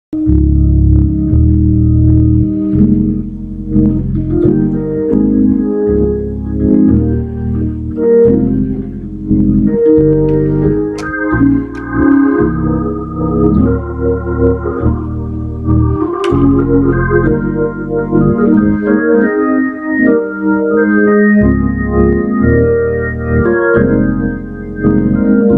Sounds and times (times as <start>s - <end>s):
Electric piano: 0.2s - 25.5s
Hammond organ: 0.2s - 25.5s.